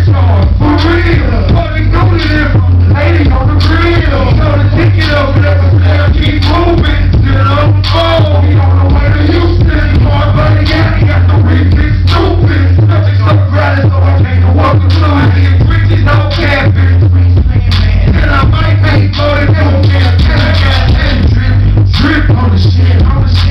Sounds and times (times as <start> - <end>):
Music: 0.0 - 23.5.